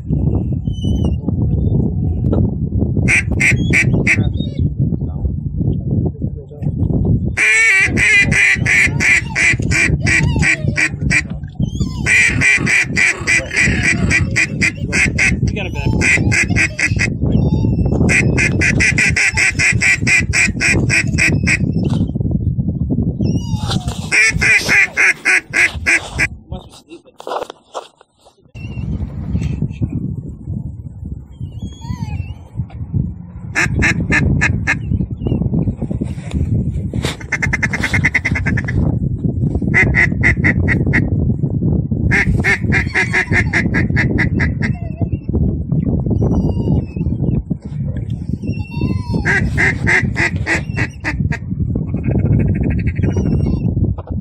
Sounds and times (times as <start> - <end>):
Quack: 3.1 - 4.3, 7.4 - 11.3, 12.1 - 17.1, 18.1 - 21.6, 24.1 - 26.3, 33.6 - 34.8, 37.2 - 38.8, 42.1 - 44.8, 49.2 - 51.2
Speech: 5.0 - 6.8, 15.5 - 16.1, 26.4 - 27.3.